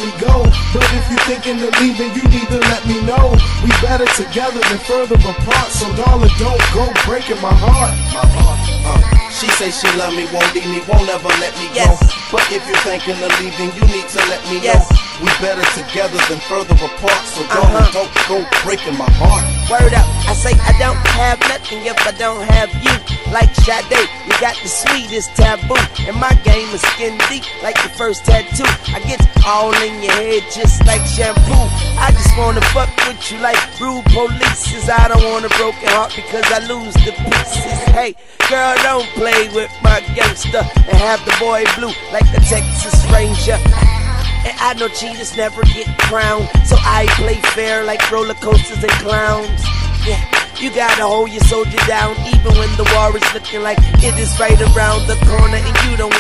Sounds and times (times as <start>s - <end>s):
Music: 0.0s - 56.2s.